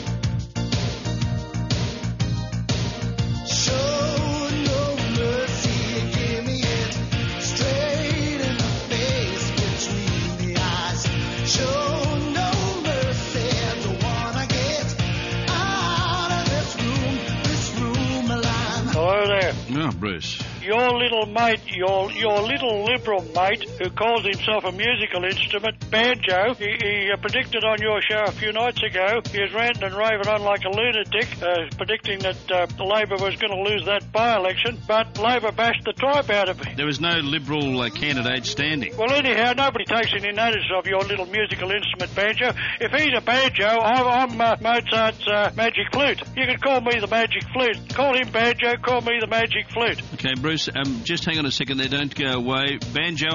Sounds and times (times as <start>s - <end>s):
Music: 0.0s - 53.3s
Speech: 18.8s - 53.3s.